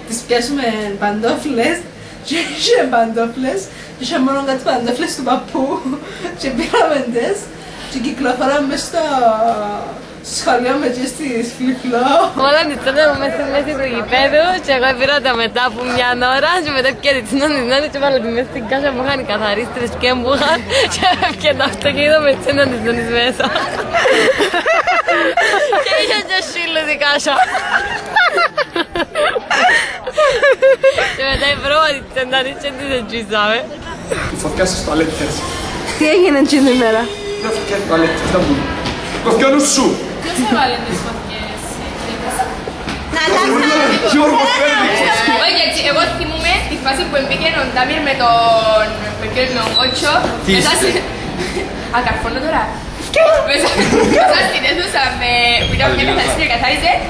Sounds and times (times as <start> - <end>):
Hubbub, speech noise, speech babble: 0.0 - 57.1
Outside, urban or manmade: 0.0 - 57.1.